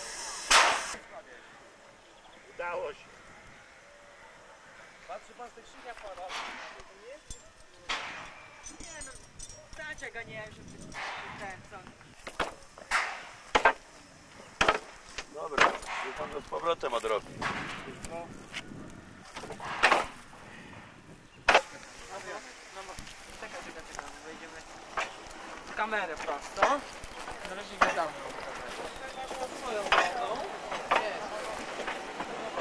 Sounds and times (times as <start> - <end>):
Train: 21.8 - 32.6.